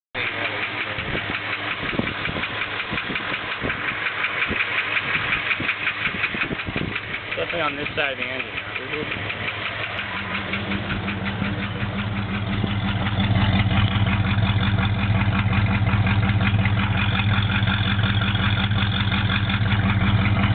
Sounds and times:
Vibration: 0.2s - 20.5s.

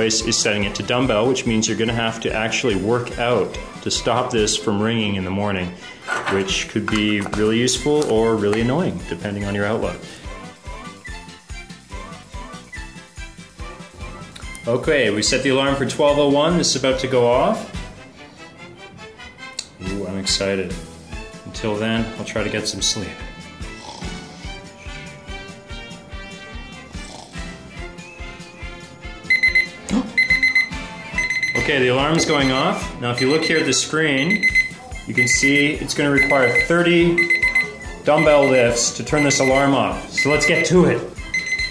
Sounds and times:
Speech: 0.0s - 10.0s, 14.6s - 17.7s, 19.8s - 20.8s, 21.4s - 23.2s, 31.6s - 34.4s, 35.1s - 37.3s, 38.0s - 41.1s
Music: 0.0s - 41.7s
Alarm: 29.3s - 41.7s.

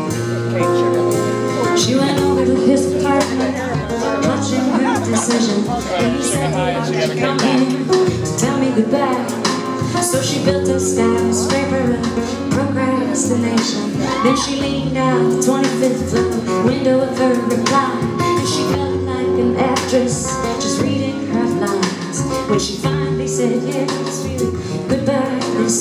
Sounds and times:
Independent music: 0.0s - 25.8s
Speech: 0.4s - 22.0s.

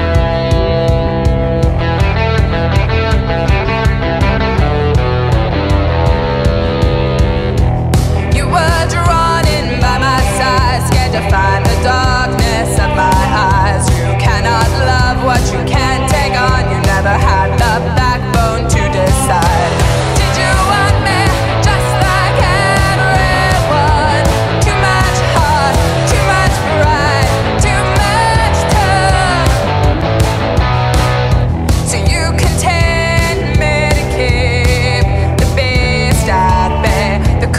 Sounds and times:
Independent music: 0.0s - 37.5s
Singing: 8.4s - 29.6s.

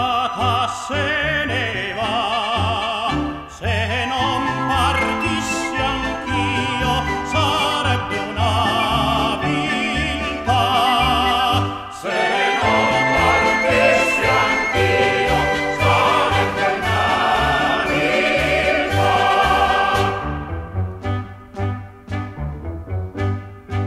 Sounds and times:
Music: 0.0s - 23.8s.

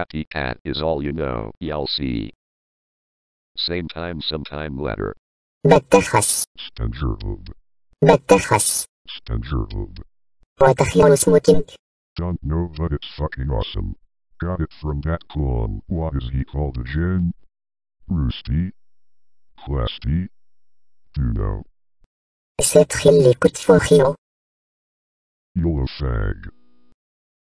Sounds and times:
Speech synthesizer: 0.0s - 2.4s, 3.6s - 10.0s, 10.6s - 17.4s, 18.1s - 18.7s, 19.6s - 20.3s, 21.2s - 21.7s, 22.6s - 24.2s, 25.6s - 26.6s.

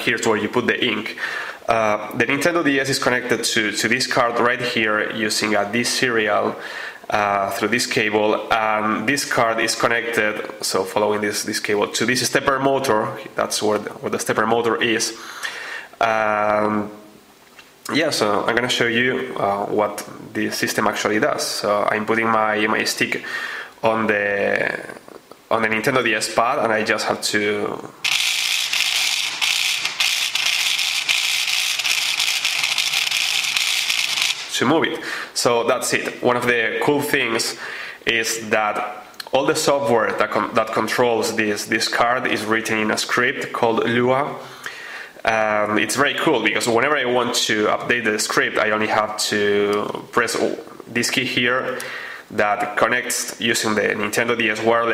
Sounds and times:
Speech: 0.0s - 15.2s, 16.0s - 17.1s, 17.9s - 28.0s, 34.5s - 44.4s, 45.2s - 54.9s.

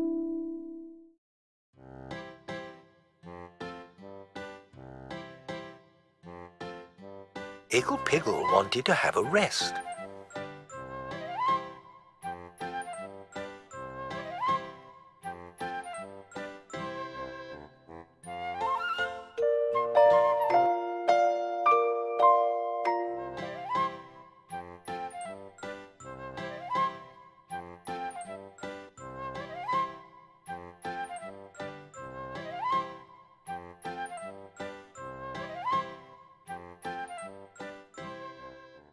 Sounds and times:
Music: 0.0s - 1.2s, 1.8s - 38.9s.

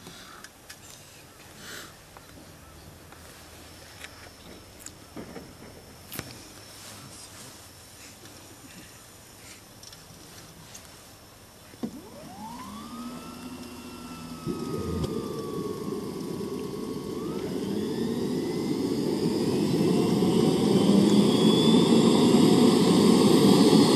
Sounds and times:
Helicopter: 11.9s - 23.9s.

